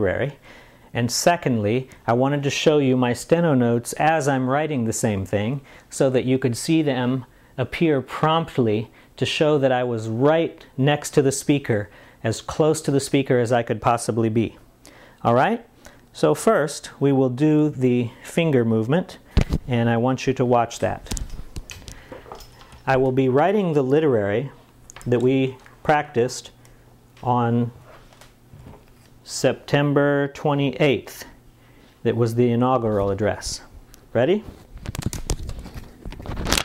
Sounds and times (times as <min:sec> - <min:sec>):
Speech: 0:00.0 - 0:00.4, 0:01.0 - 0:14.6, 0:15.2 - 0:21.2, 0:22.9 - 0:26.6, 0:27.2 - 0:27.8, 0:29.2 - 0:31.4, 0:32.0 - 0:34.6.